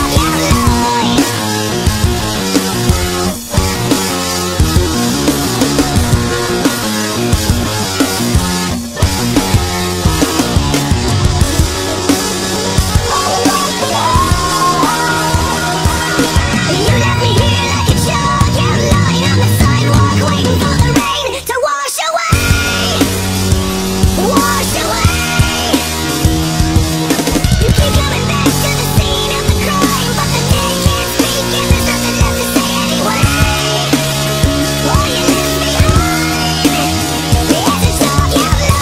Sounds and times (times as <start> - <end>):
Music: 0.0 - 38.8.